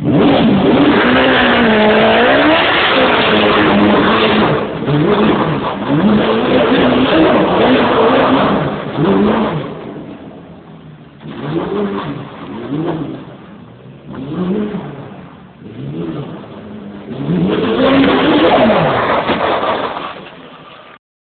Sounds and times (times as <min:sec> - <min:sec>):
Accelerating, revving, vroom: 0:00.0 - 0:09.8, 0:11.2 - 0:13.3, 0:14.1 - 0:15.0, 0:15.6 - 0:16.5, 0:17.1 - 0:19.8
Vehicle: 0:00.0 - 0:21.0.